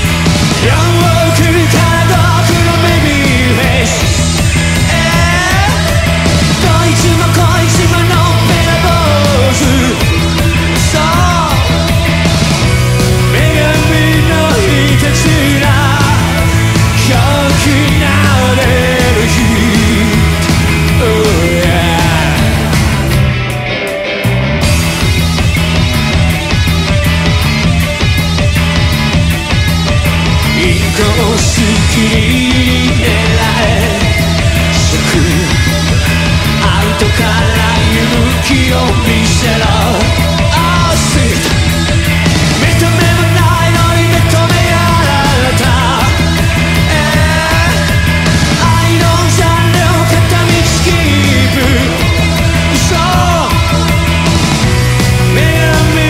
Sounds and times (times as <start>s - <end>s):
Music: 0.0s - 56.0s.